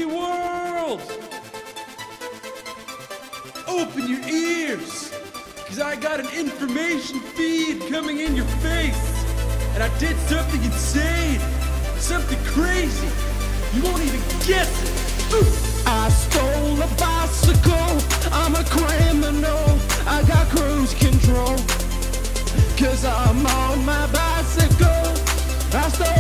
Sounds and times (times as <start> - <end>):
Music: 0.0 - 26.2.